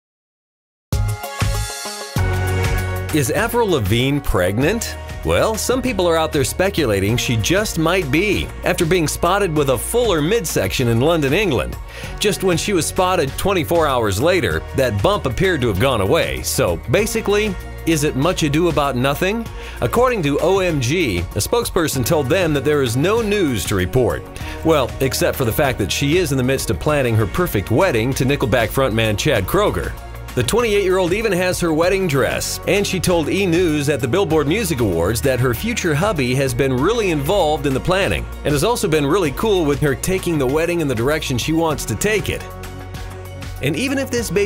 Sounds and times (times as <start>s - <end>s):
Music: 0.9s - 44.4s
Speech: 3.1s - 42.5s, 43.6s - 44.4s.